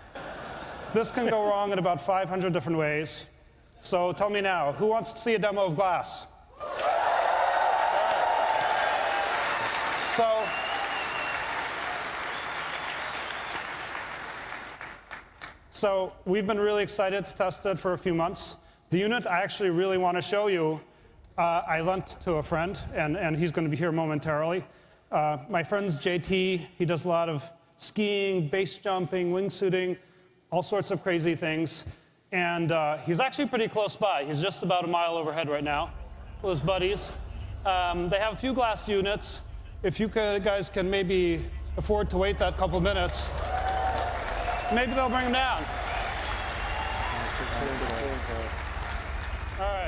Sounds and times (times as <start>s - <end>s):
Speech: 0.9s - 6.3s, 15.8s - 43.3s.